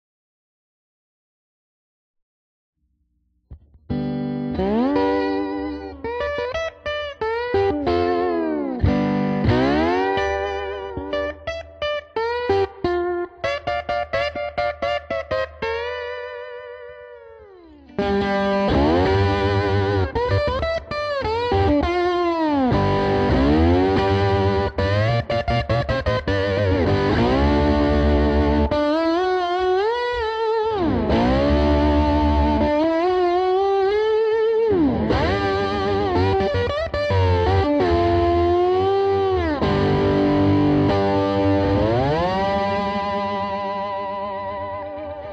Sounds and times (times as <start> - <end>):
Strum: 3.5 - 45.3.